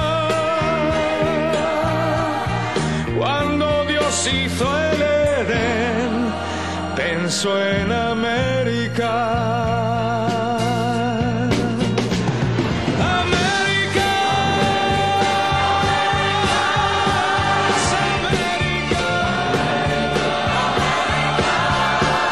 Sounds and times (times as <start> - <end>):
Music: 0.0 - 22.3.